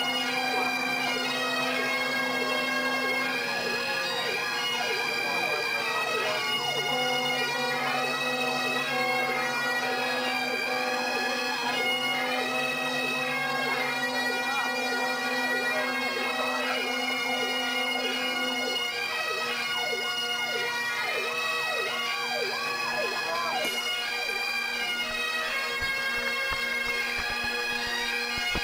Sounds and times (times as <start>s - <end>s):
Music: 0.0s - 28.6s
Speech: 3.4s - 6.6s, 22.9s - 23.7s.